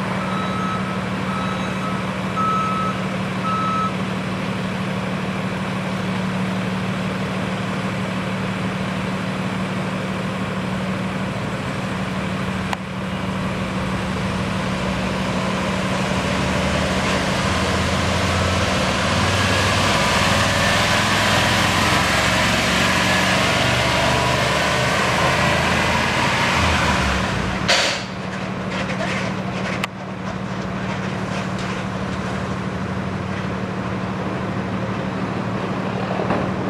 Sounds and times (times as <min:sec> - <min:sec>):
Truck: 0:00.0 - 0:36.7.